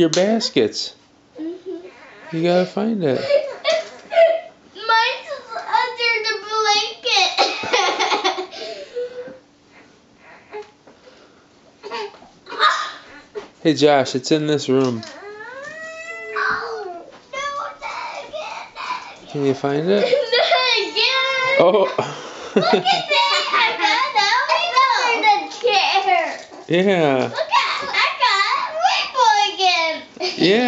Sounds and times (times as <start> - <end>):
Child speech, kid speaking: 4.8 - 7.4, 14.9 - 22.0, 22.6 - 26.6, 27.2 - 30.6
Belly laugh: 7.4 - 8.8, 19.9 - 24.2.